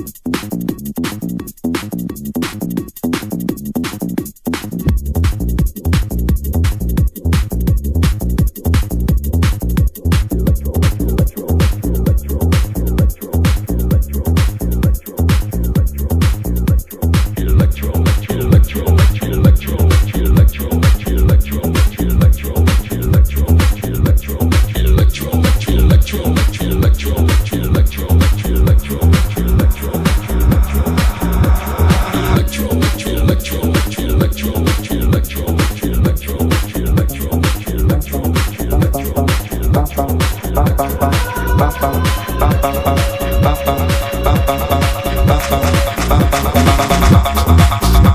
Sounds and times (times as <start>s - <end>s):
Disco: 0.0s - 48.1s
Electronic music: 0.0s - 48.1s.